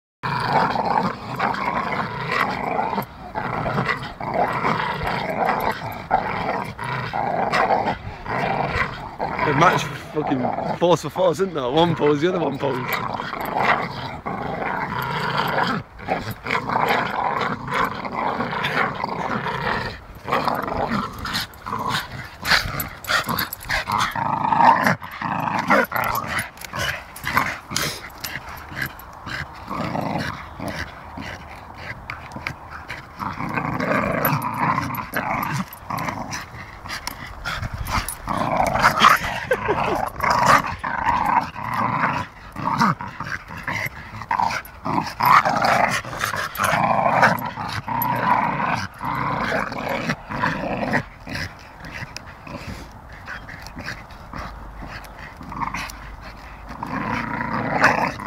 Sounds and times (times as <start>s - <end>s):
Roar: 0.2s - 58.2s
Canidae, dogs, wolves: 0.6s - 58.2s
Speech: 9.4s - 13.0s.